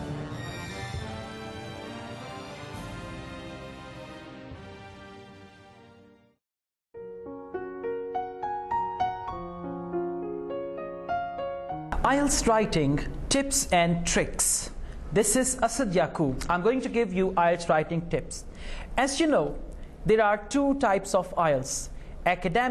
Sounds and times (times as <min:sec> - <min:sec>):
Piano: 0:00.0 - 0:06.0, 0:07.0 - 0:13.3.